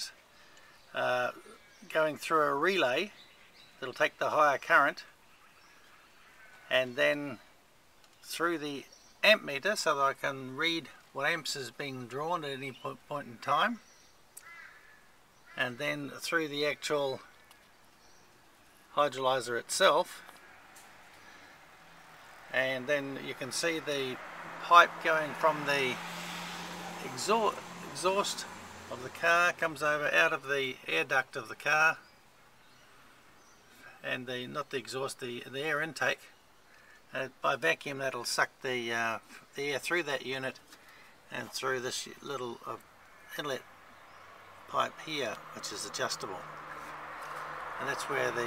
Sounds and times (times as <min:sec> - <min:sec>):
Speech: 0:00.9 - 0:03.2, 0:03.8 - 0:05.1, 0:06.7 - 0:07.4, 0:08.3 - 0:13.8, 0:15.6 - 0:17.3, 0:18.9 - 0:20.2, 0:22.5 - 0:26.0, 0:27.0 - 0:32.0, 0:34.0 - 0:36.3, 0:37.1 - 0:40.6, 0:41.3 - 0:43.6, 0:44.7 - 0:46.5, 0:47.8 - 0:48.4.